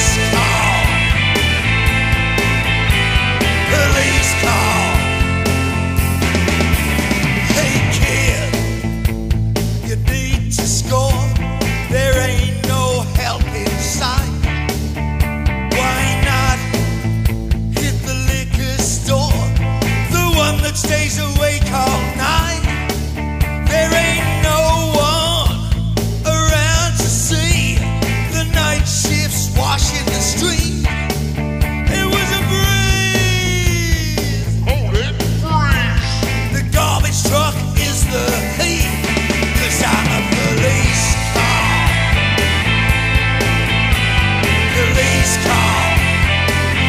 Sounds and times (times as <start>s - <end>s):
Grunge: 0.0s - 46.8s.